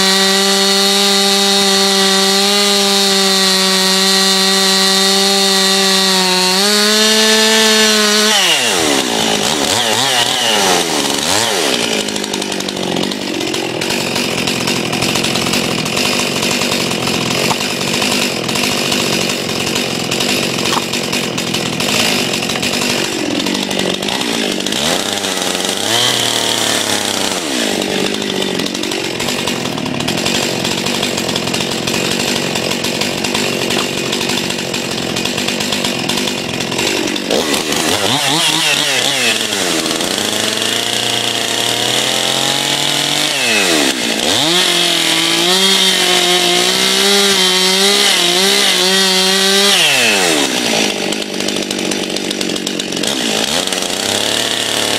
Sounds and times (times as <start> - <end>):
Chainsaw: 0.0 - 54.9
Outside, rural or natural: 0.0 - 54.9
Power tool: 0.0 - 54.9.